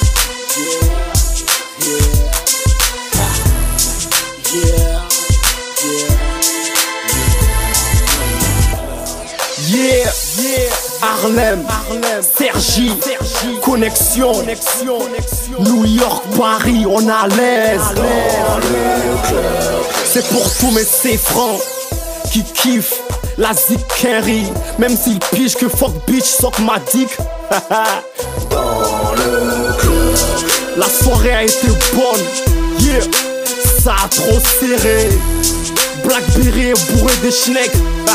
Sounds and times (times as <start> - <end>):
Hip hop music: 0.0 - 38.1.